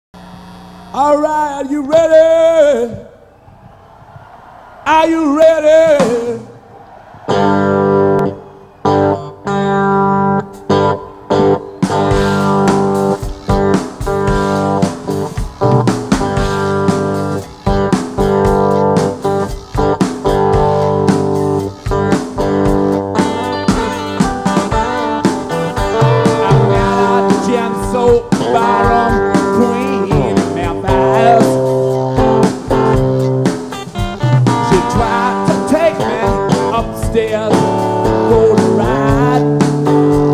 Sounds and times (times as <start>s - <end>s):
Speech: 1.0s - 3.1s, 4.9s - 6.5s
Guitar: 5.3s - 40.3s.